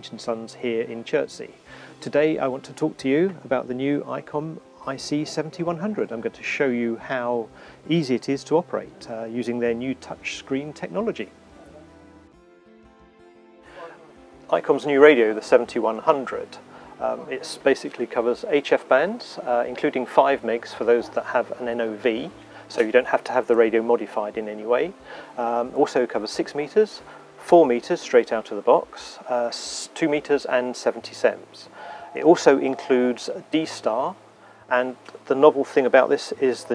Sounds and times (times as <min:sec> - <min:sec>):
Speech: 0:00.0 - 0:11.8, 0:13.8 - 0:36.7.